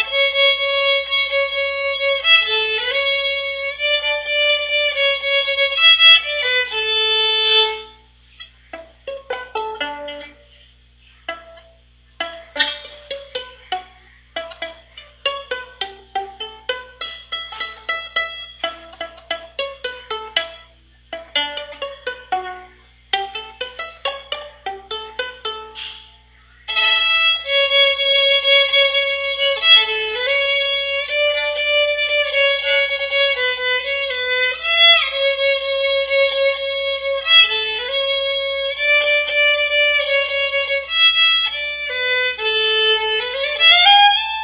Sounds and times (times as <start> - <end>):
Violin, fiddle: 0.0 - 10.5, 11.3 - 25.9, 26.7 - 44.4.